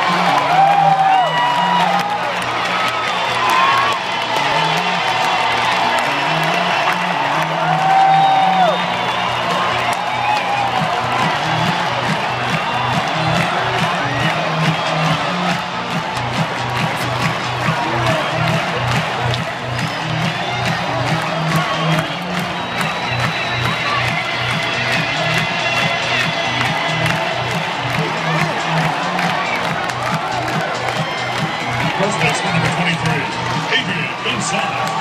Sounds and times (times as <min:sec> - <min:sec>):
Music: 0:00.0 - 0:35.0
Speech: 0:32.0 - 0:34.8.